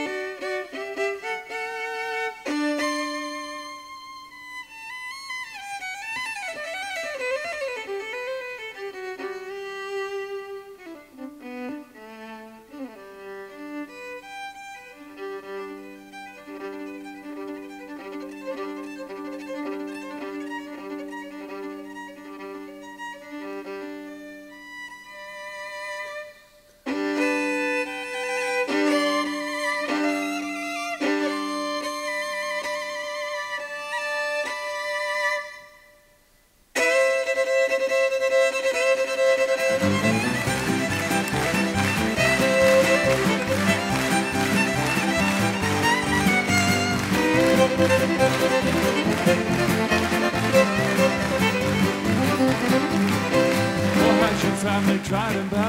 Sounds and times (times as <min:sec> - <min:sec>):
String section: 0:00.0 - 0:36.0, 0:36.8 - 0:55.6.